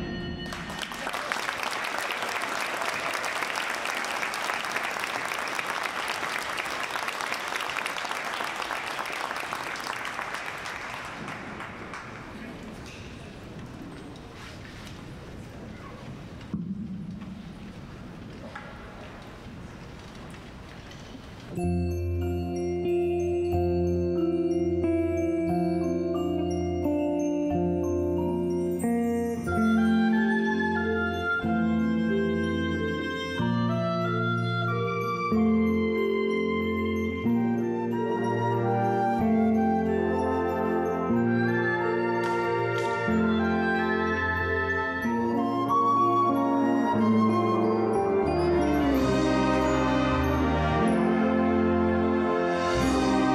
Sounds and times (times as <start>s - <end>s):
Orchestra: 17.3s - 53.3s.